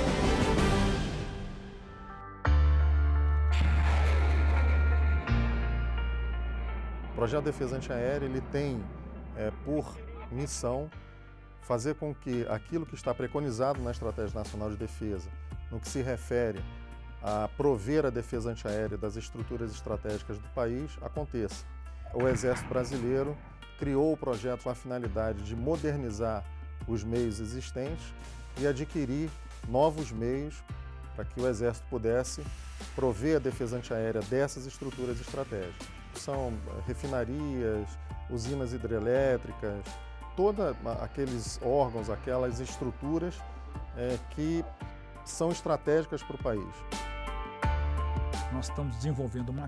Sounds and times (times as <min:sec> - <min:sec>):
Music: 0:00.0 - 0:49.6
Speech: 0:07.2 - 0:11.0, 0:11.7 - 0:16.6, 0:17.2 - 0:30.6, 0:31.2 - 0:43.4, 0:44.0 - 0:44.7, 0:45.3 - 0:46.8, 0:48.5 - 0:49.6.